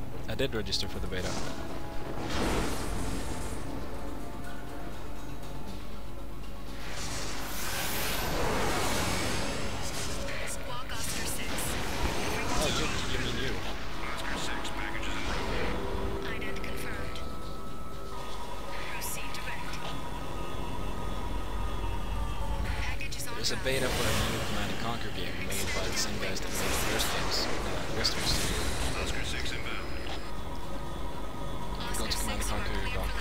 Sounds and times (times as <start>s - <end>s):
Speech: 23.2s - 28.4s.